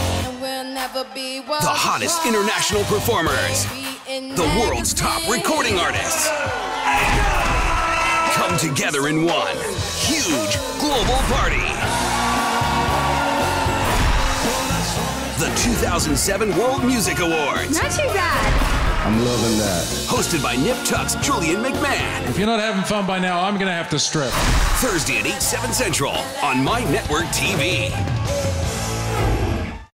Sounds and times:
Soundtrack music: 0:00.0 - 0:29.9
Speech: 0:04.3 - 0:06.3, 0:19.1 - 0:27.9.

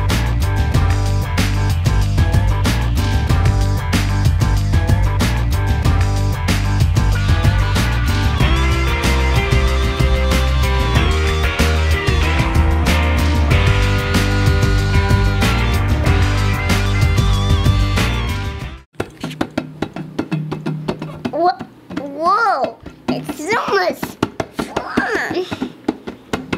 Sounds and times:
Drum: 0:00.0 - 0:26.5.

